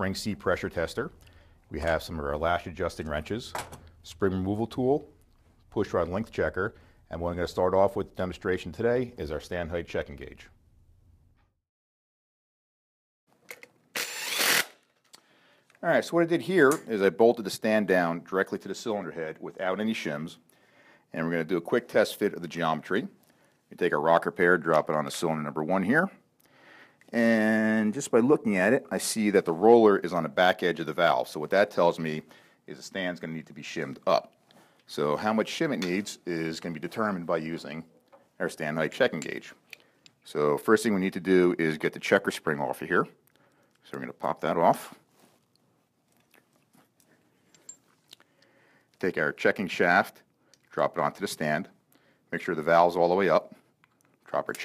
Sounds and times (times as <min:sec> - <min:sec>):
Speech: 0:00.0 - 0:05.1, 0:05.7 - 0:10.5, 0:15.8 - 0:20.4, 0:21.1 - 0:26.2, 0:27.1 - 0:34.3, 0:34.9 - 0:39.6, 0:40.2 - 0:43.2, 0:43.8 - 0:45.0, 0:49.0 - 0:53.6, 0:54.3 - 0:54.6.